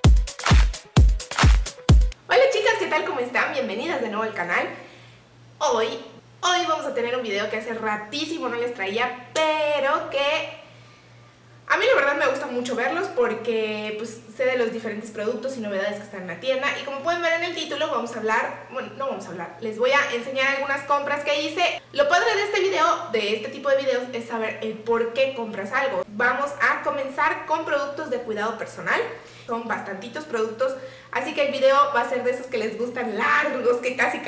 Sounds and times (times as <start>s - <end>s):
Speech: 2.3s - 4.8s, 5.6s - 10.6s, 11.7s - 34.2s.